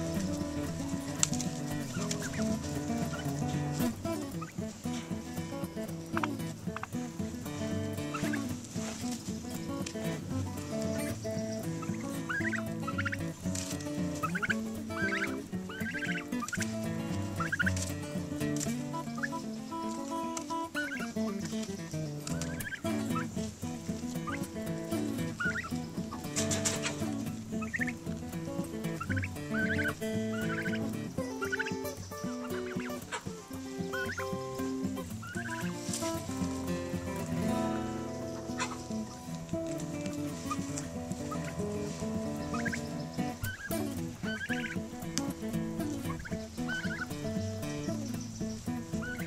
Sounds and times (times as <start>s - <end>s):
Gobble: 0.1s - 4.5s, 6.1s - 7.0s, 8.0s - 9.0s, 10.7s - 21.1s, 22.3s - 23.3s, 24.1s - 28.0s, 28.9s - 36.6s, 38.2s - 39.8s, 40.4s - 44.9s, 45.8s - 47.2s, 49.0s - 49.2s.